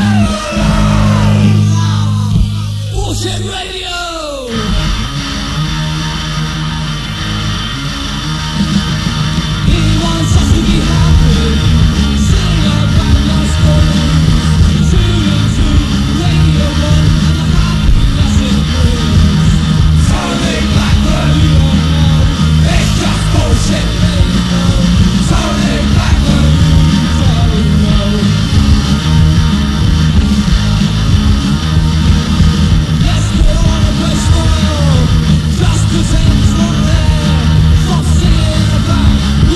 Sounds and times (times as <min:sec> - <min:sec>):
Punk rock: 0:00.0 - 0:39.5.